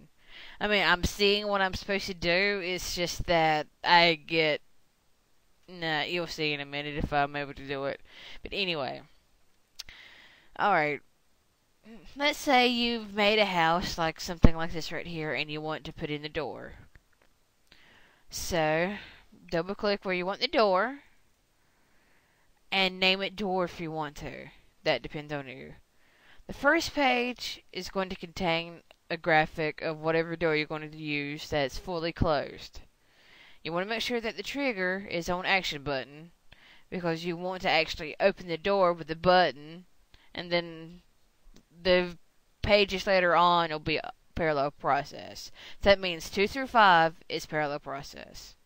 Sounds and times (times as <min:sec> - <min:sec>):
Speech: 0:00.6 - 0:04.6, 0:05.7 - 0:09.1, 0:10.6 - 0:11.0, 0:11.9 - 0:16.9, 0:18.3 - 0:21.1, 0:22.8 - 0:25.8, 0:26.5 - 0:32.9, 0:33.7 - 0:41.0, 0:41.7 - 0:48.6.